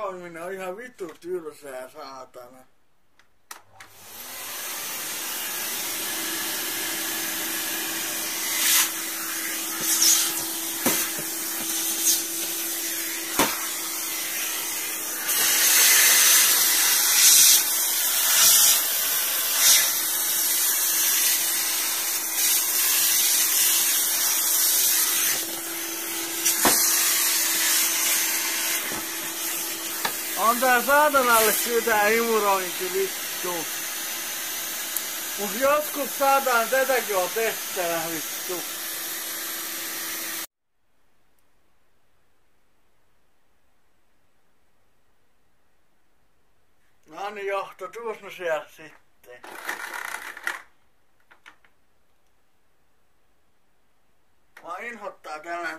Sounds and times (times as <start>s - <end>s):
Vacuum cleaner: 3.7s - 40.5s.